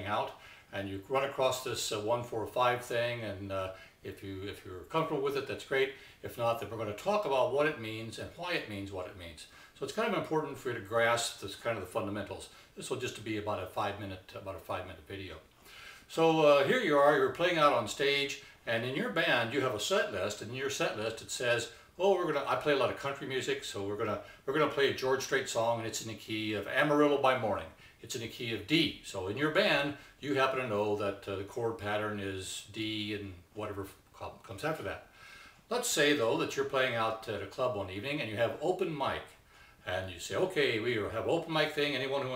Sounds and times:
Speech: 0.0s - 15.5s, 16.1s - 35.1s, 35.7s - 42.3s.

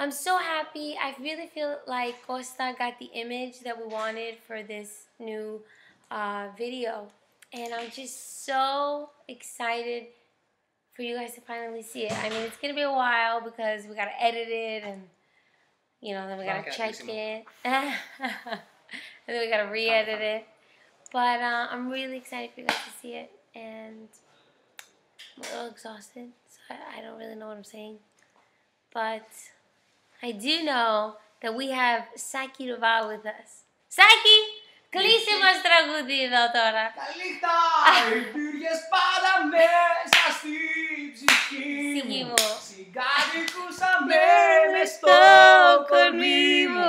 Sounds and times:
Speech: 11.0s - 15.0s, 16.1s - 17.4s, 34.0s - 46.8s.

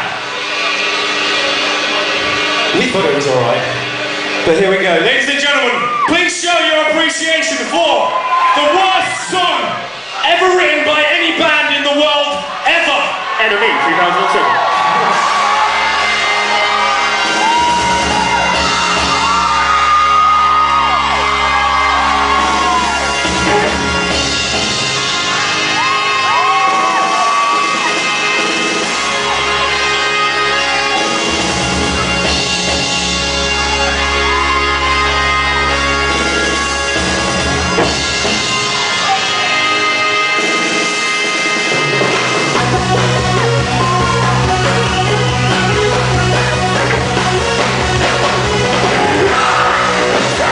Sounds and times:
Music: 0.0s - 50.5s
Speech: 2.7s - 3.8s, 4.4s - 14.6s.

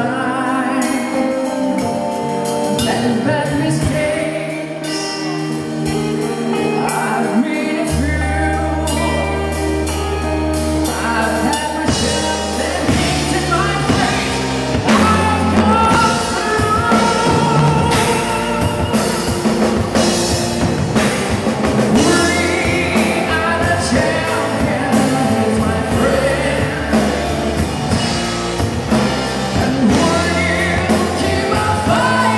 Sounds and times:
Background music: 0.0s - 32.3s.

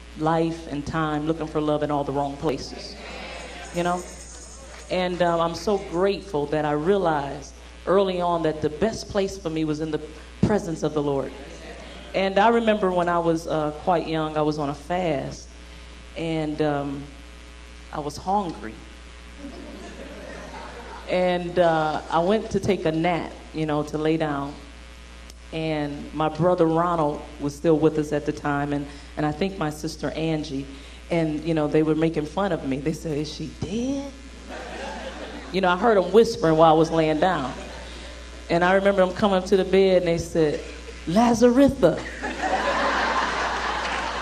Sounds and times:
Speech: 0.2s - 15.5s, 16.2s - 17.2s, 18.0s - 18.9s, 21.1s - 24.7s, 25.5s - 34.2s, 35.5s - 37.7s, 38.5s - 42.1s.

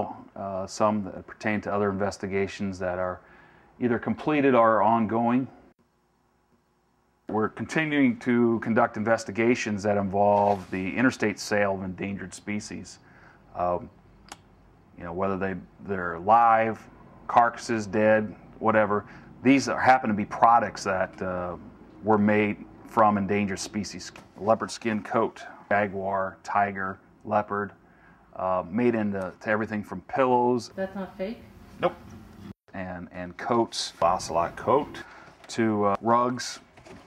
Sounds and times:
Speech: 0.0s - 3.2s, 3.8s - 5.6s, 7.3s - 13.0s, 13.6s - 13.9s, 15.0s - 27.8s, 28.4s - 32.0s, 32.7s - 36.7s.

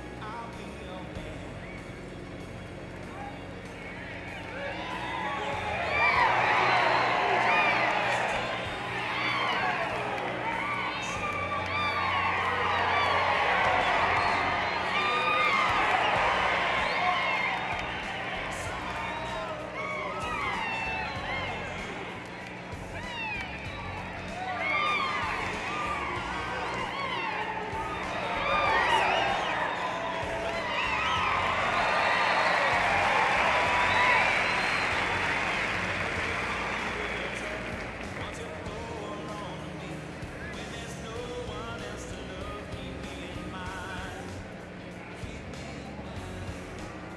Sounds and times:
Music: 0.0s - 47.1s.

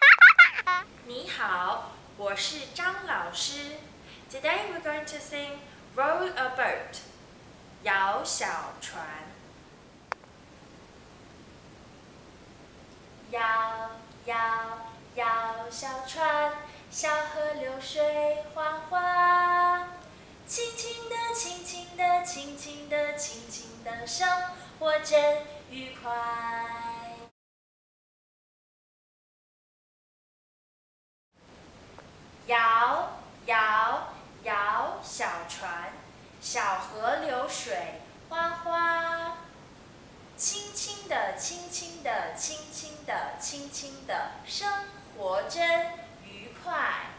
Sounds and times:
Speech: 1.0s - 7.1s, 7.8s - 9.4s, 13.3s - 18.0s, 25.7s - 26.5s, 32.5s - 39.5s, 40.4s - 47.1s.

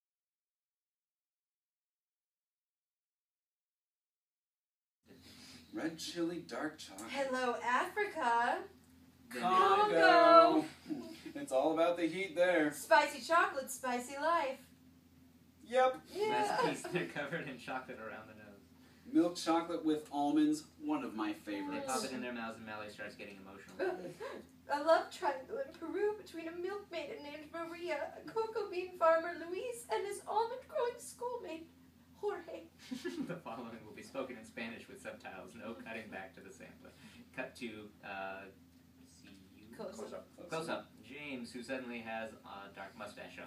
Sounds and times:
Speech: 9.3s - 10.8s, 19.3s - 28.1s.

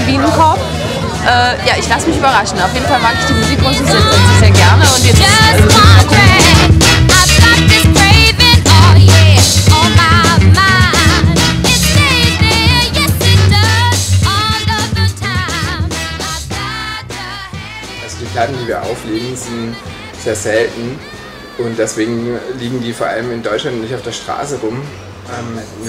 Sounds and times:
Music: 0.0s - 25.8s.

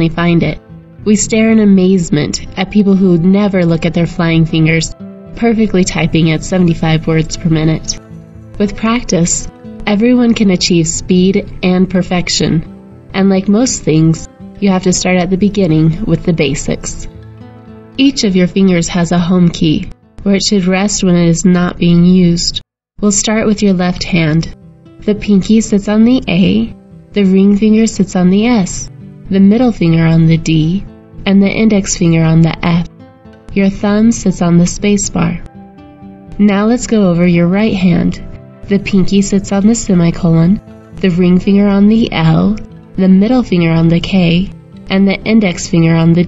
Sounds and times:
Narration, monologue: 0.0s - 46.2s.

